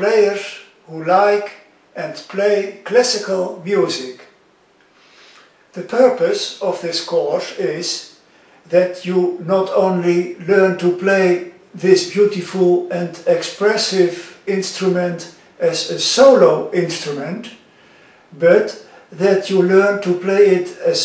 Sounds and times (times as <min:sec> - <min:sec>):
Speech: 0:00.0 - 0:04.4, 0:05.8 - 0:17.6, 0:18.4 - 0:21.0.